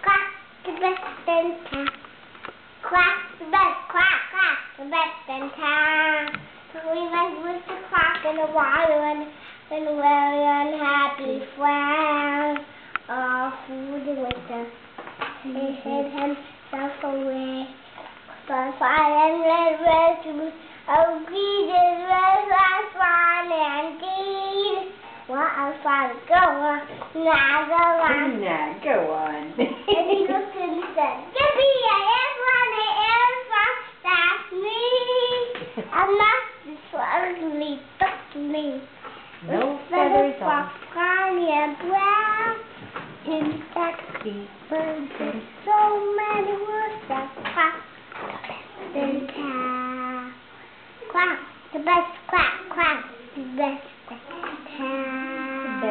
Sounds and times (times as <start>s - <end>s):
Child singing: 0.0s - 2.1s, 2.8s - 14.8s, 15.4s - 28.4s, 30.0s - 39.0s, 39.8s - 47.9s, 48.7s - 55.9s
Speech: 28.0s - 31.6s, 39.4s - 40.8s, 44.1s - 45.5s, 48.8s - 49.7s, 55.4s - 55.9s.